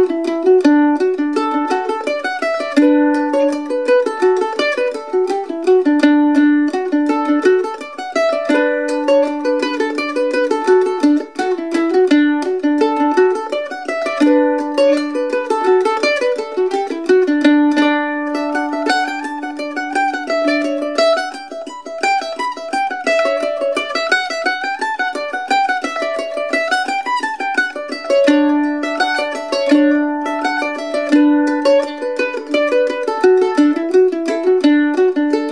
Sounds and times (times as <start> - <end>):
Pizzicato: 0.0 - 35.5.